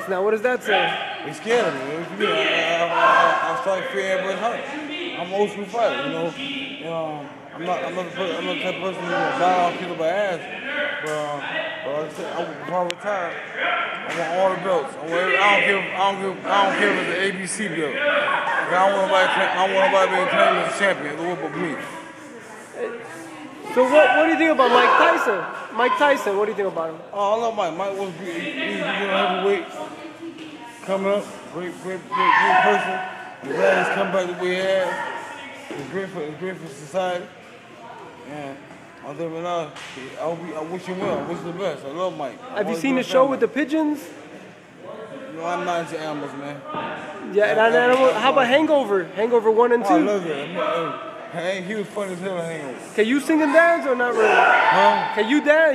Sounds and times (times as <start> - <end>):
Inside, large room or hall: 0.0 - 55.7.